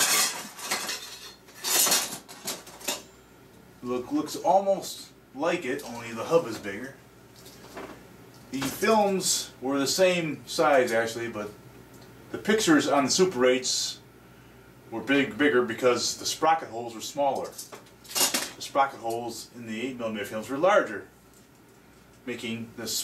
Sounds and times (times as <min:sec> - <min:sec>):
Speech: 0:03.8 - 0:07.0, 0:08.5 - 0:11.6, 0:12.3 - 0:14.1, 0:14.9 - 0:17.6, 0:18.6 - 0:21.1, 0:22.2 - 0:23.0.